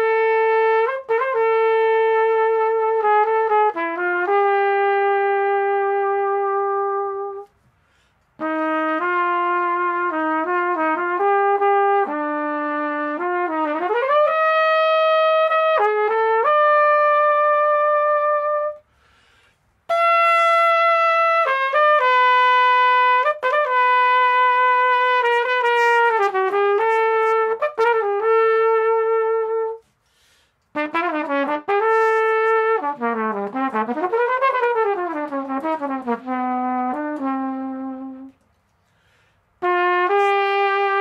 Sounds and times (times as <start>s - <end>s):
Trumpet: 0.0s - 41.0s.